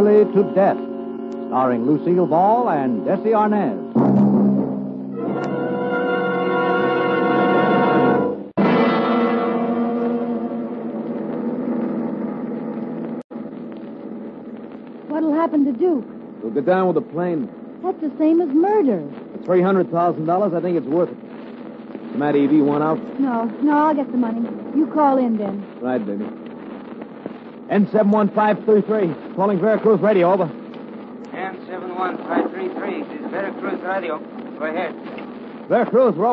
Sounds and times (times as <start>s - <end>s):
Radio: 0.0s - 4.0s, 11.1s - 36.3s
Speech: 1.5s - 3.8s, 15.1s - 21.2s, 22.2s - 26.2s, 27.7s - 30.5s, 31.3s - 35.0s, 35.7s - 36.3s.